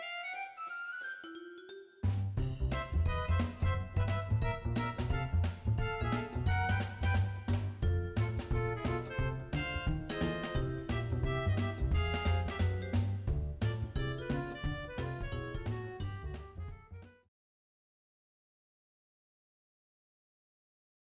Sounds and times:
Music: 0:00.0 - 0:17.3.

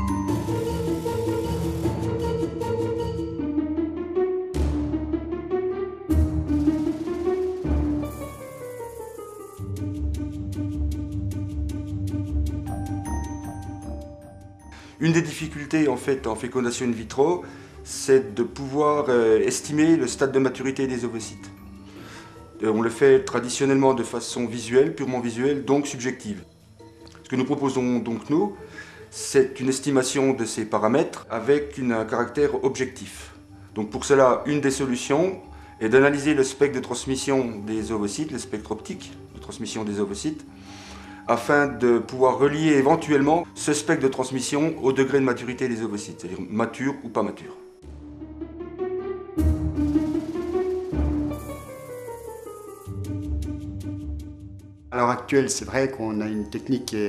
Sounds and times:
Music: 0:00.0 - 0:57.0
Speech: 0:15.0 - 0:21.6, 0:22.6 - 0:26.4, 0:27.2 - 0:28.6, 0:29.2 - 0:40.5, 0:41.3 - 0:47.6, 0:54.9 - 0:57.0.

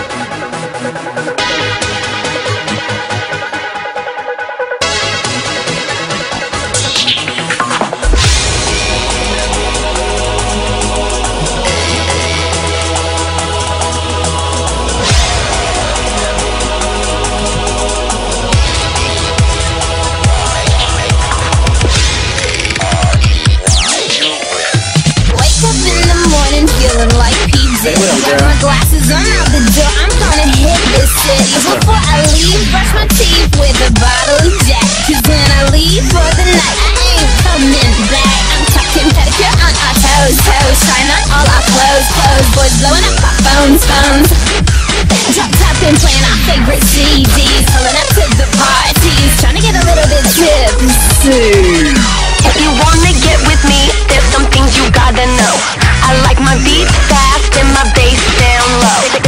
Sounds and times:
Dubstep: 0:04.8 - 0:59.2.

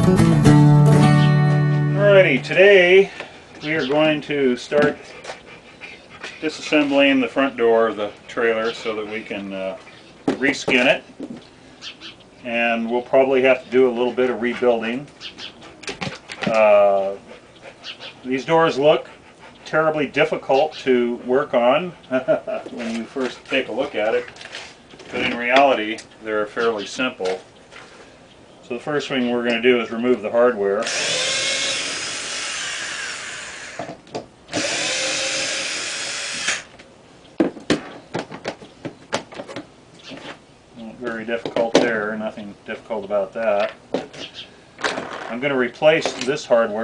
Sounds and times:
Speech: 0:02.0 - 0:05.0, 0:06.4 - 0:11.0, 0:12.4 - 0:15.1, 0:16.5 - 0:17.2, 0:18.2 - 0:19.1, 0:19.7 - 0:24.3, 0:25.1 - 0:27.4, 0:28.7 - 0:30.9, 0:40.8 - 0:43.8, 0:45.3 - 0:46.8.

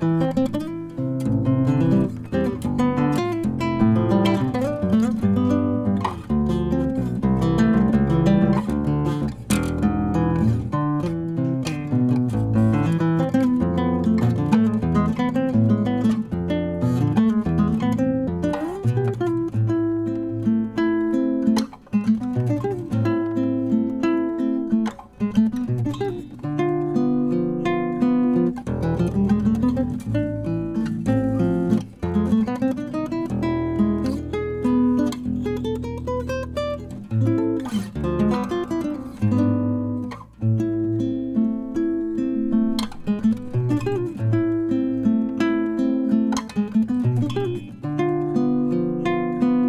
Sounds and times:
Acoustic guitar: 0:00.0 - 0:49.6.

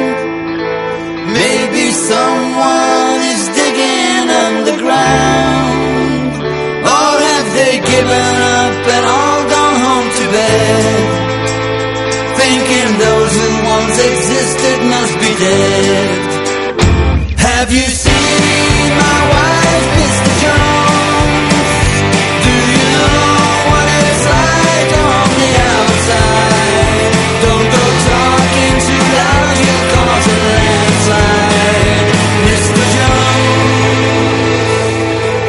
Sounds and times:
Grunge: 0:00.0 - 0:35.4.

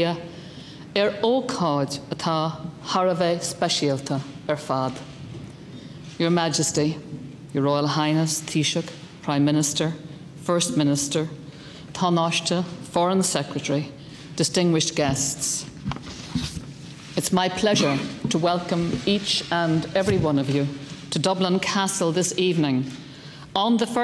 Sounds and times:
Female speech, woman speaking: 0:00.0 - 0:00.3, 0:01.0 - 0:05.1, 0:06.2 - 0:11.4, 0:12.0 - 0:15.7, 0:17.2 - 0:24.0
Narration, monologue: 0:00.0 - 0:24.0.

